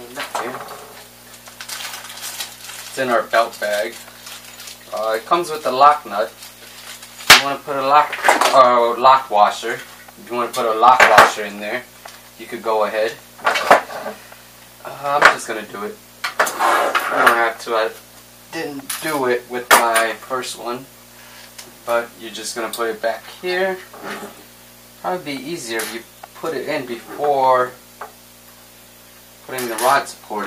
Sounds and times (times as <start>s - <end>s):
Speech: 0.0s - 0.8s, 2.9s - 4.0s, 4.9s - 6.4s, 7.3s - 13.2s, 14.8s - 16.0s, 17.0s - 20.9s, 21.9s - 24.3s, 25.0s - 27.8s, 29.5s - 30.4s.